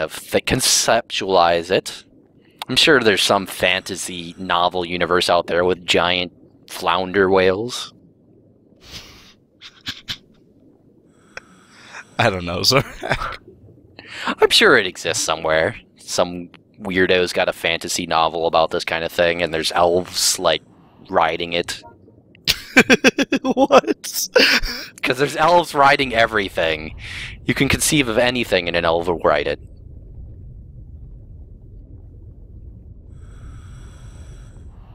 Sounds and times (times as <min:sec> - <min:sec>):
Speech: 0:00.0 - 0:02.0, 0:02.7 - 0:07.9, 0:12.2 - 0:13.4, 0:14.3 - 0:21.9, 0:25.0 - 0:29.6.